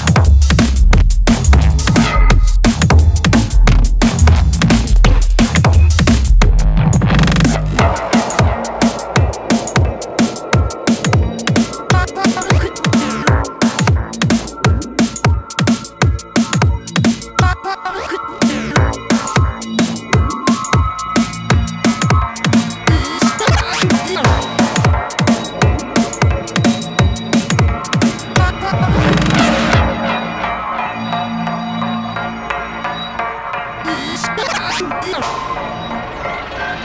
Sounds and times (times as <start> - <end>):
Dubstep: 0.0 - 31.0, 33.8 - 36.8
Drum and bass: 0.0 - 32.7.